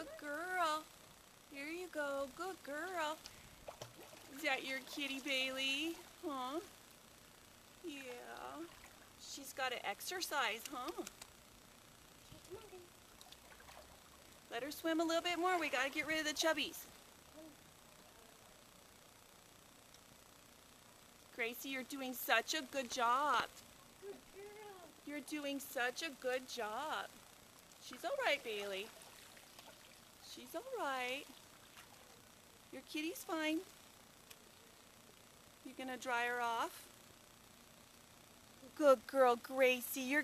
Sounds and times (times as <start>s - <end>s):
Speech: 0.0s - 0.9s, 1.5s - 3.2s, 4.3s - 6.7s, 7.9s - 11.1s, 14.5s - 17.6s, 21.4s - 27.1s, 27.8s - 28.9s, 30.2s - 31.3s, 32.8s - 33.7s, 35.6s - 36.8s, 38.6s - 40.2s.